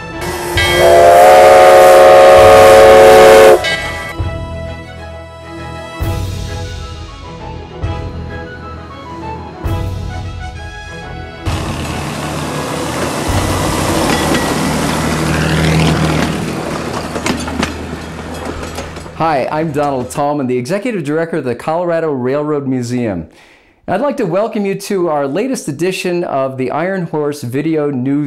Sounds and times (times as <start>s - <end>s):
Speech: 19.2s - 23.3s, 23.9s - 28.2s.